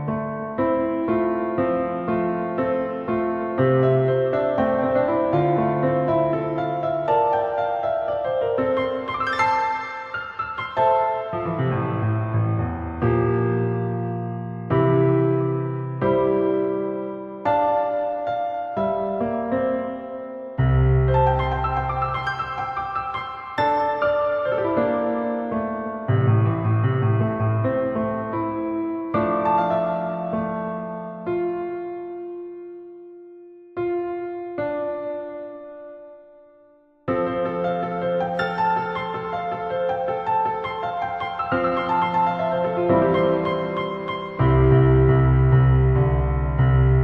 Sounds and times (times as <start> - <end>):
Music: 0.0 - 47.0.